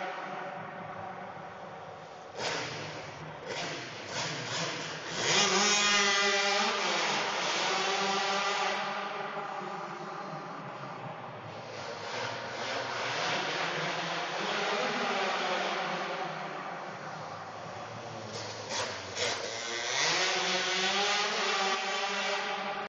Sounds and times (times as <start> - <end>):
Vehicle: 0.0 - 22.8
Accelerating, revving, vroom: 2.4 - 9.4, 11.7 - 16.8, 18.3 - 22.8.